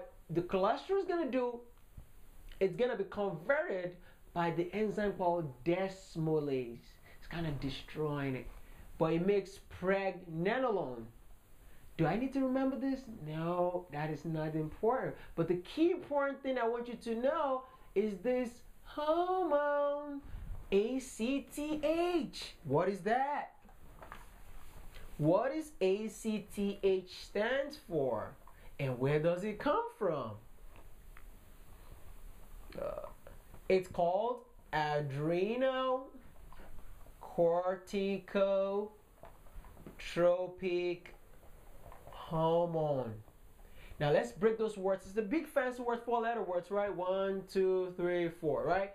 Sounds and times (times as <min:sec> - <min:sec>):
Speech: 0:00.0 - 0:01.7, 0:02.5 - 0:11.2, 0:12.0 - 0:23.7, 0:25.2 - 0:30.5, 0:32.7 - 0:36.3, 0:37.2 - 0:39.0, 0:39.9 - 0:41.2, 0:42.1 - 0:43.3, 0:44.0 - 0:48.9
Inside, small room: 0:00.0 - 0:48.9.